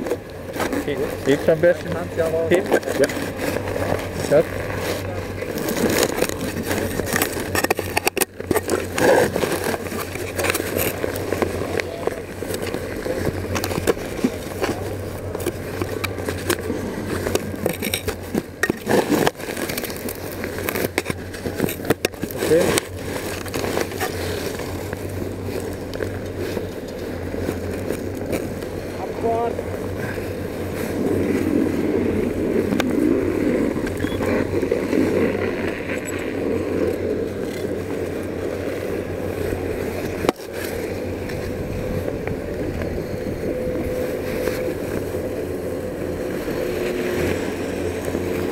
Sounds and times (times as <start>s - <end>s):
Speech: 0.8s - 3.2s, 29.0s - 29.6s.